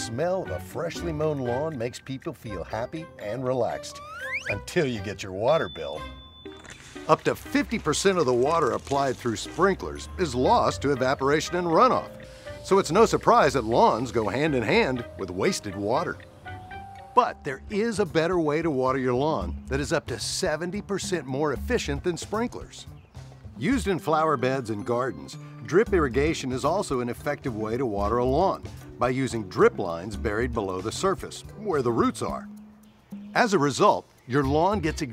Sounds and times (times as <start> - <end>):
Speech: 0.0 - 6.1, 7.1 - 12.1, 12.7 - 16.2, 17.2 - 22.9, 23.6 - 32.5, 33.4 - 35.1
Music: 0.0 - 35.1.